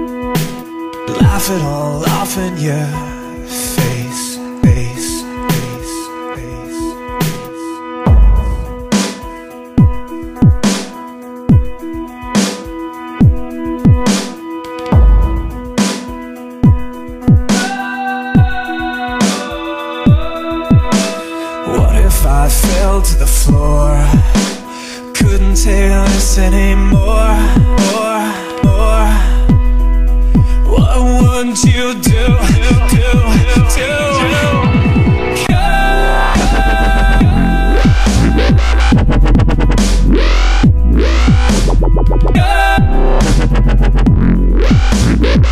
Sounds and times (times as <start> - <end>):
Dubstep: 0.0 - 45.5.